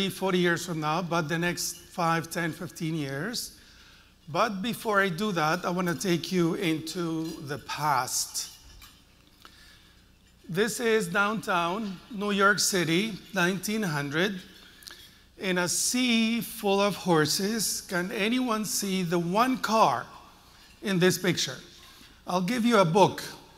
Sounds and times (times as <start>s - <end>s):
Speech: 0.0s - 3.6s, 4.3s - 8.6s, 10.5s - 14.5s, 15.4s - 21.7s, 22.3s - 23.5s.